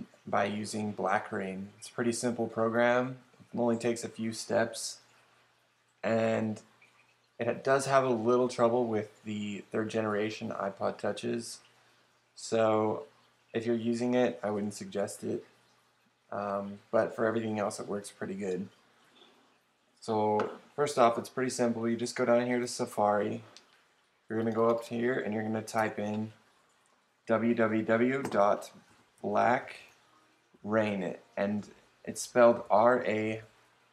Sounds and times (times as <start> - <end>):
Speech: 0.0 - 5.0, 6.0 - 6.6, 7.4 - 11.6, 12.4 - 15.4, 16.3 - 18.7, 20.0 - 23.5, 24.3 - 26.4, 27.3 - 29.9, 30.6 - 33.5.